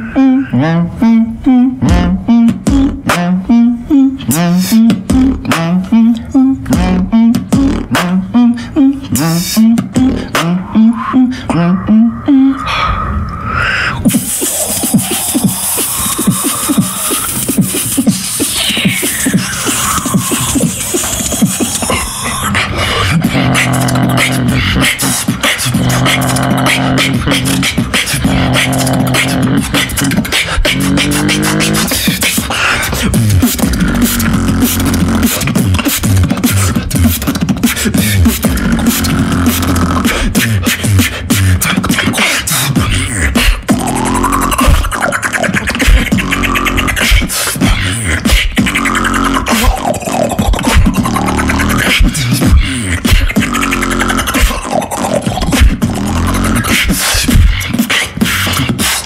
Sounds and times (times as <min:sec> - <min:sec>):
Scratching (performance technique): 0:01.8 - 0:10.8, 0:13.9 - 0:59.0.